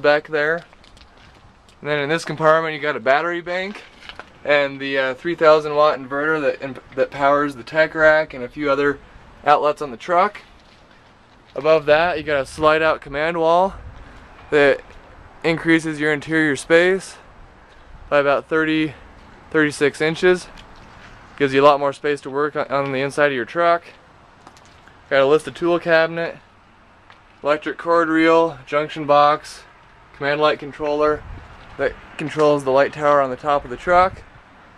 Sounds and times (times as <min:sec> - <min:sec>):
Speech: 0:00.0 - 0:00.7, 0:01.8 - 0:03.8, 0:04.5 - 0:10.4, 0:11.6 - 0:13.8, 0:14.5 - 0:17.2, 0:18.1 - 0:20.5, 0:21.4 - 0:24.0, 0:25.1 - 0:26.4, 0:27.4 - 0:31.2, 0:31.8 - 0:34.2
Vehicle: 0:00.0 - 0:34.7.